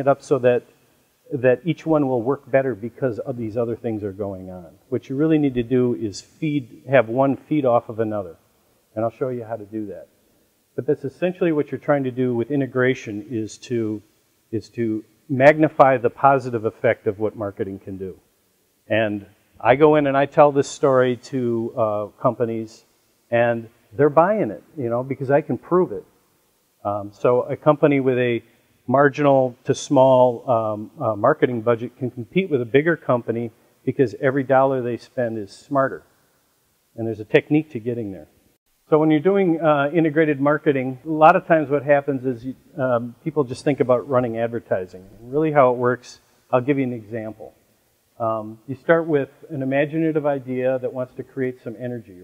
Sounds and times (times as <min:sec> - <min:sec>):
Speech: 0:00.0 - 0:00.7, 0:01.3 - 0:08.4, 0:09.0 - 0:10.1, 0:10.8 - 0:18.2, 0:18.9 - 0:26.0, 0:26.8 - 0:36.0, 0:37.0 - 0:38.3, 0:38.9 - 0:47.6, 0:48.2 - 0:52.2.